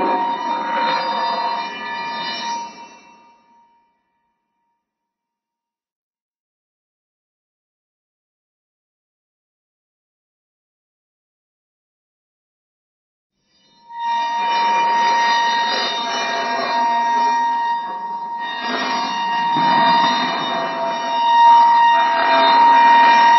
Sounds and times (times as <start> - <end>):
Squeak: 13.5 - 23.3.